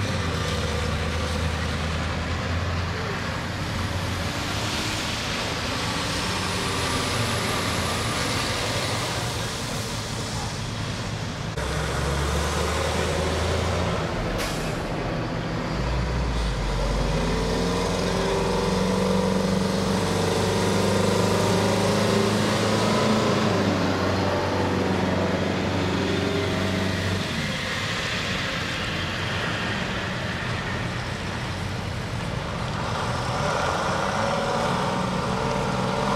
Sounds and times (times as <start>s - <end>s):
Truck: 0.0s - 36.1s.